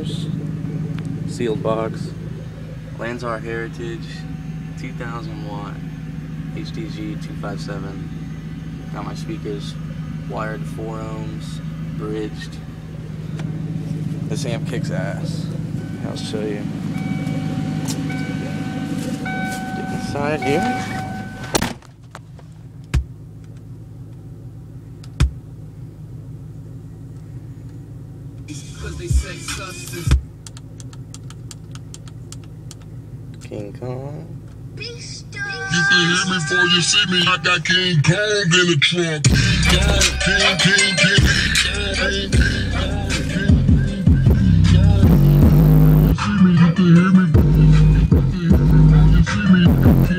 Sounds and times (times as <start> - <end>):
Speech: 14.3 - 16.7, 33.4 - 34.4
Music: 28.5 - 30.2, 39.3 - 50.1.